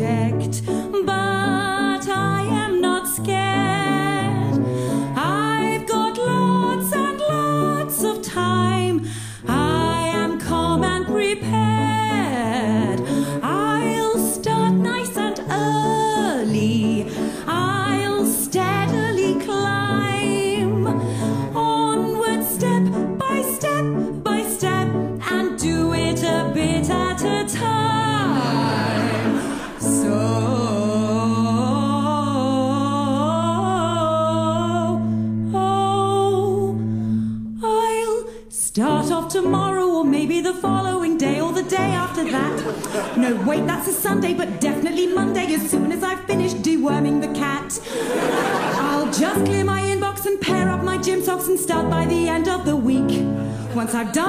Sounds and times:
Music: 0:00.0 - 0:54.2.

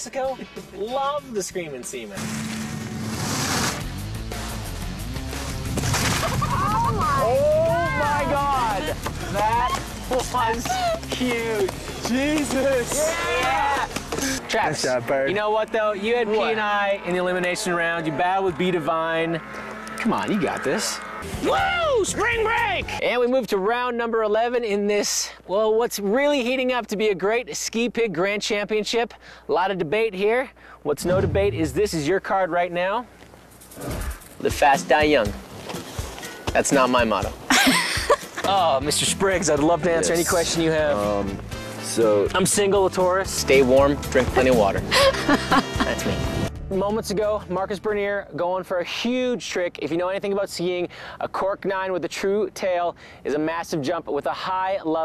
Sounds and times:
Music: 0:00.0 - 0:14.4, 0:21.2 - 0:23.0, 0:33.9 - 0:48.1.

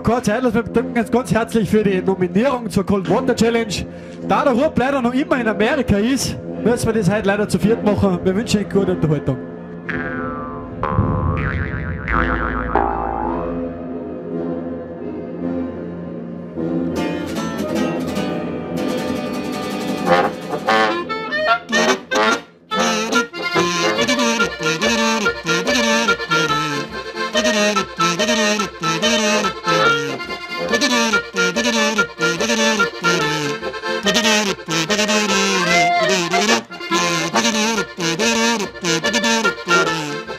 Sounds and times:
Music: 0:00.0 - 0:12.0, 0:12.8 - 0:40.3.

